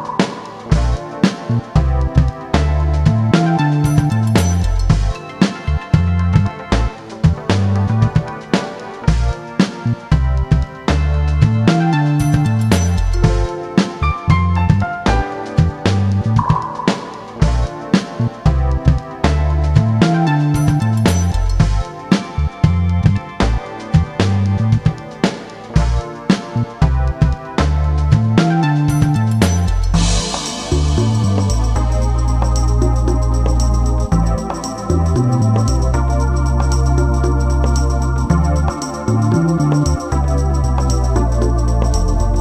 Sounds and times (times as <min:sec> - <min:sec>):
Music: 0:00.0 - 0:42.4.